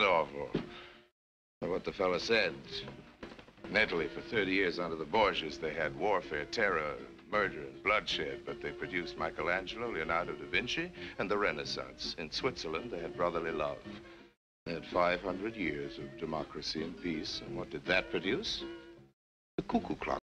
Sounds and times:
Male speech, man speaking: 0:00.0 - 0:00.6, 0:01.6 - 0:02.9, 0:03.7 - 0:13.9, 0:14.7 - 0:18.7, 0:19.6 - 0:20.2
Music: 0:00.0 - 0:20.2
Narration, monologue: 0:00.0 - 0:20.2.

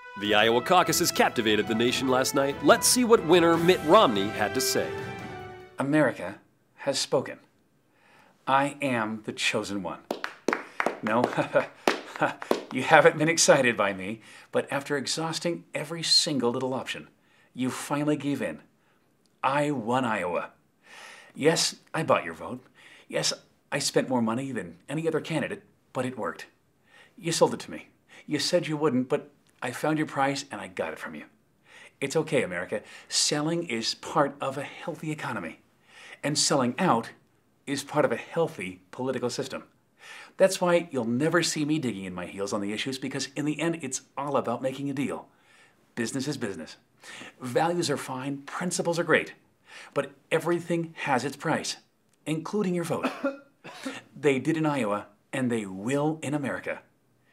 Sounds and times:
Narration, monologue: 0:00.0 - 0:57.3
Male speech, man speaking: 0:00.2 - 0:05.0, 0:05.8 - 0:07.5, 0:08.5 - 0:10.1, 0:11.0 - 0:11.6, 0:12.3 - 0:18.7, 0:19.4 - 0:20.6, 0:21.4 - 0:26.6, 0:27.2 - 0:31.3, 0:32.0 - 0:35.6, 0:36.2 - 0:39.7, 0:40.4 - 0:45.3, 0:46.0 - 0:46.8, 0:47.4 - 0:49.4, 0:50.0 - 0:53.1, 0:54.2 - 0:56.9.

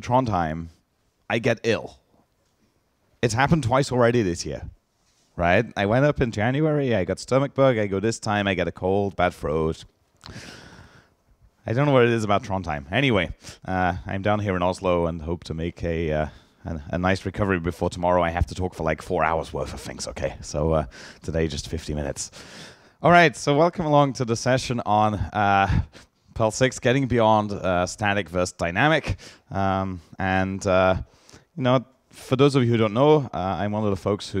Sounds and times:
Speech: 0:00.0 - 0:02.0, 0:03.2 - 0:04.8, 0:05.4 - 0:09.9, 0:11.6 - 0:22.3, 0:23.0 - 0:34.4.

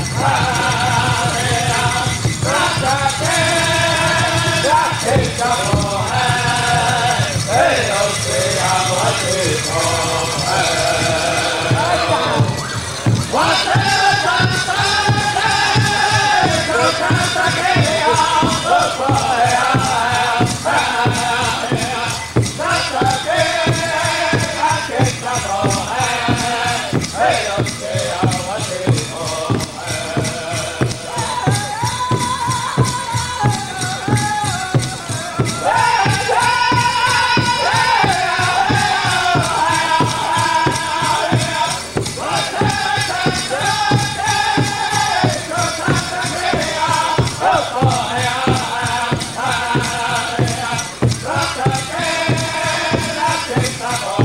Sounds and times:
Music: 0:00.0 - 0:54.2.

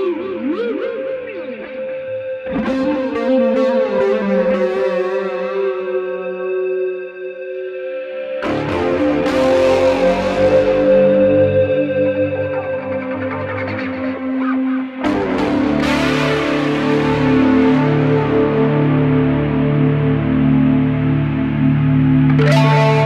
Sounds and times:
Electric guitar: 0:00.0 - 0:23.0.

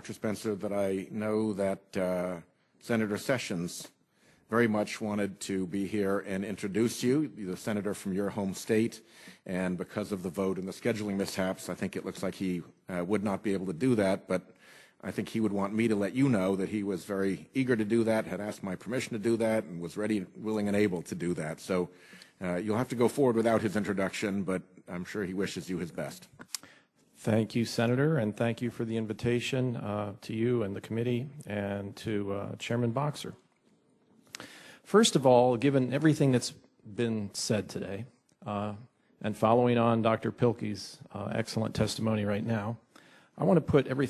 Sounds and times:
Male speech, man speaking: 0:00.0 - 0:26.3, 0:27.2 - 0:33.4, 0:34.9 - 0:42.8, 0:43.4 - 0:44.0
Narration, monologue: 0:00.0 - 0:44.0.

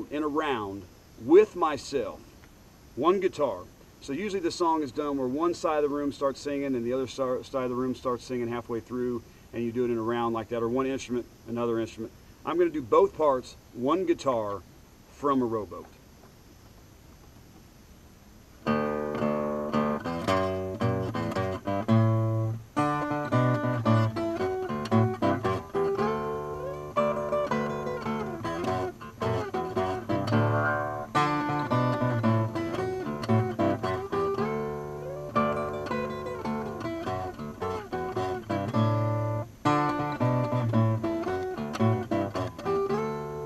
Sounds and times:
Music: 0:18.7 - 0:43.4.

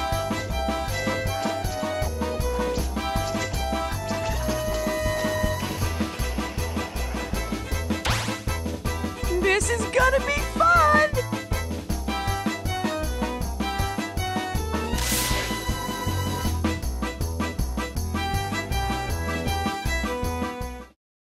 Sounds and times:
Music: 0:00.0 - 0:21.0.

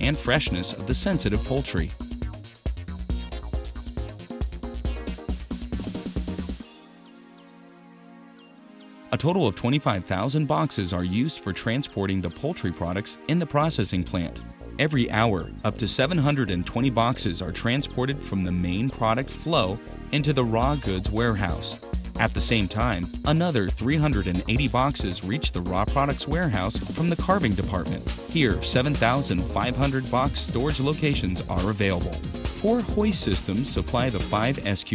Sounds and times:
Speech: 0:00.0 - 0:02.0, 0:09.2 - 0:34.9
Music: 0:00.0 - 0:34.9.

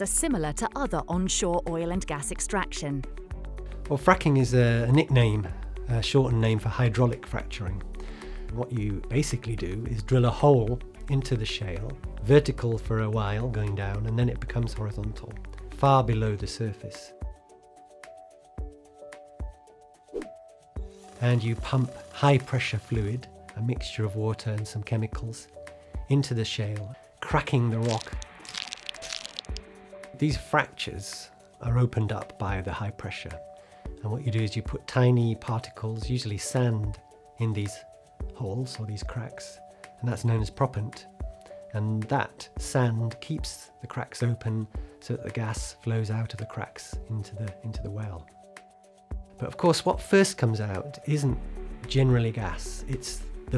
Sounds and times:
Speech: 0:00.0 - 0:03.0, 0:03.9 - 0:07.8, 0:08.6 - 0:17.1, 0:21.2 - 0:25.5, 0:26.1 - 0:28.2, 0:30.2 - 0:33.4, 0:34.0 - 0:41.1, 0:41.7 - 0:48.3, 0:49.4 - 0:53.5
Music: 0:00.0 - 0:53.5.

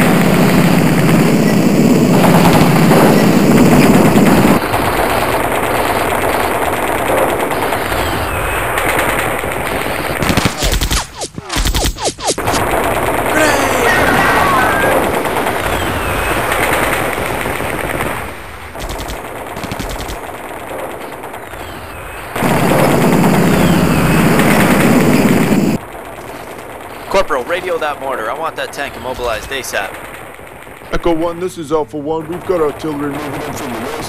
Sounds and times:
Machine gun: 0:00.0 - 0:31.4, 0:32.2 - 0:34.0.

